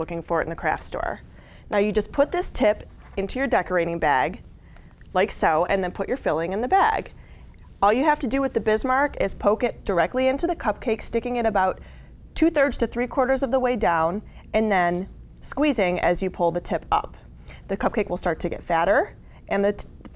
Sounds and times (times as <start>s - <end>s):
Speech: 0.0s - 4.4s, 5.1s - 7.1s, 7.8s - 11.8s, 12.4s - 20.1s.